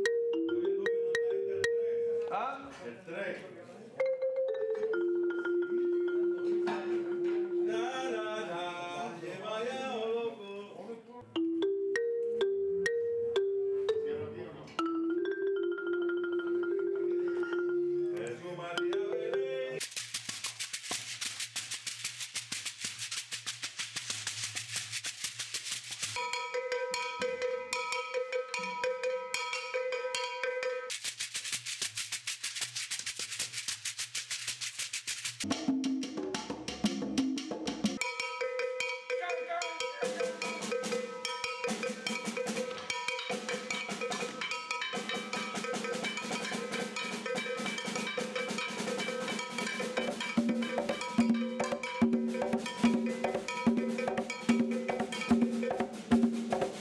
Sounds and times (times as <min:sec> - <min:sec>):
Percussion: 0:00.0 - 0:03.2, 0:03.9 - 0:09.0, 0:11.2 - 0:56.8
Song: 0:04.0 - 0:08.4.